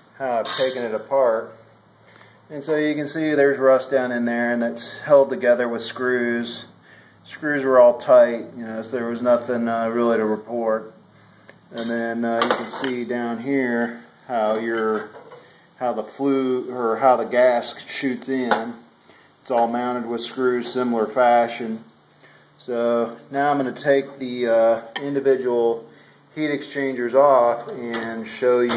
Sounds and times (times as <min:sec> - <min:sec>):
Inside, small room: 0:00.0 - 0:28.7
Speech: 0:00.2 - 0:01.6, 0:02.5 - 0:11.0, 0:11.7 - 0:15.2, 0:15.8 - 0:18.8, 0:19.4 - 0:21.9, 0:22.6 - 0:28.7.